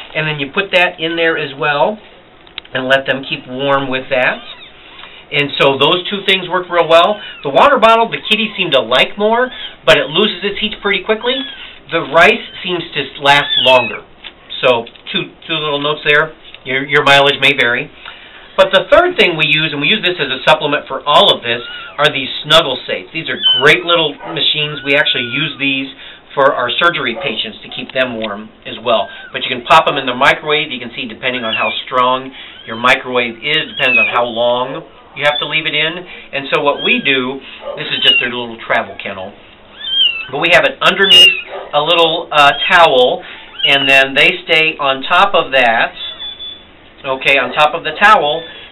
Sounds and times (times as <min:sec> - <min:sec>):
Speech: 0:00.1 - 0:02.0, 0:02.7 - 0:04.6, 0:05.3 - 0:17.9, 0:18.6 - 0:39.4, 0:40.3 - 0:46.2, 0:47.0 - 0:48.6
Cat: 0:04.4 - 0:04.8, 0:11.4 - 0:11.7, 0:13.4 - 0:14.0, 0:21.6 - 0:22.0, 0:23.4 - 0:25.6, 0:32.4 - 0:33.0, 0:33.6 - 0:34.2, 0:36.7 - 0:37.2, 0:37.9 - 0:38.4, 0:39.8 - 0:40.4, 0:41.0 - 0:41.7, 0:43.4 - 0:43.9, 0:47.5 - 0:48.7.